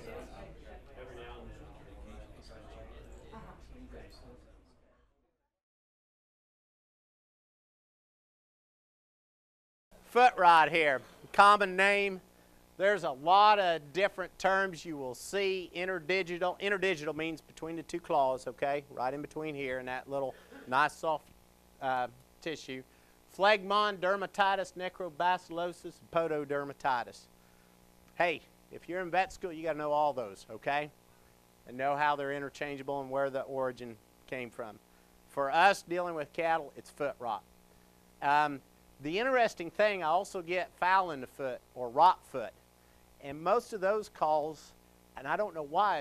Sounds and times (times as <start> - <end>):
Speech: 0.0 - 5.0, 10.1 - 12.2, 12.8 - 22.8, 23.4 - 27.3, 28.2 - 31.0, 31.7 - 37.4, 38.2 - 42.6, 43.2 - 46.0.